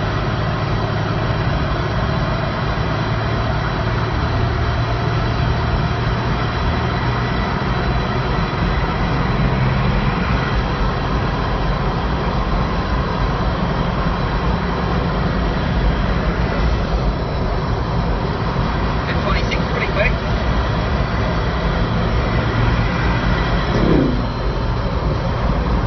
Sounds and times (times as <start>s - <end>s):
Speech: 19.0s - 20.2s.